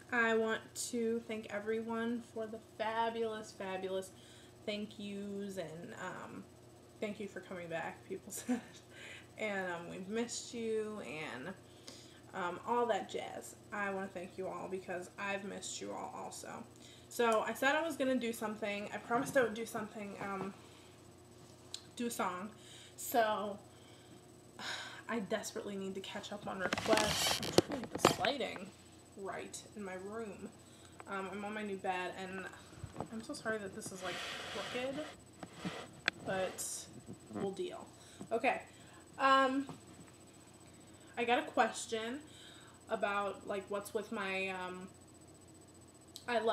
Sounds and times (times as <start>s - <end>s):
Speech: 0.1s - 4.1s, 4.7s - 6.4s, 7.0s - 8.6s, 9.4s - 11.6s, 12.3s - 20.6s, 22.0s - 23.6s, 25.1s - 30.5s, 31.1s - 35.2s, 36.2s - 39.7s, 41.2s - 42.3s, 42.9s - 44.9s, 46.2s - 46.5s.